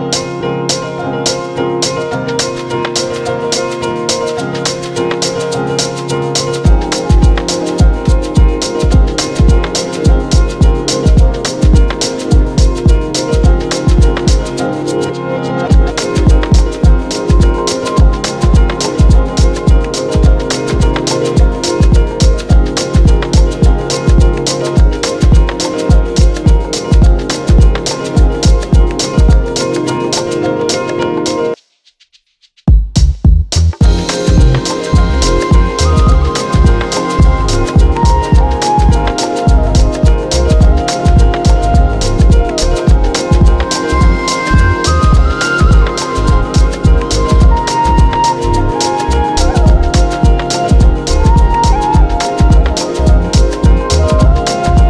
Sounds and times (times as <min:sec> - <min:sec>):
Music: 0:00.0 - 0:31.6, 0:32.6 - 0:54.8.